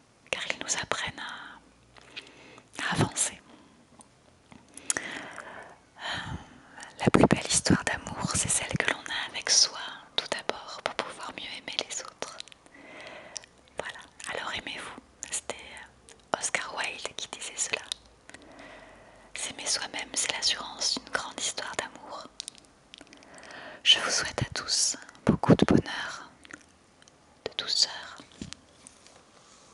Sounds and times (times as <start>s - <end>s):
Whispering: 0.3s - 1.6s, 2.8s - 3.6s, 6.0s - 12.6s, 13.7s - 18.0s, 19.3s - 22.4s, 23.8s - 26.4s, 27.4s - 28.4s.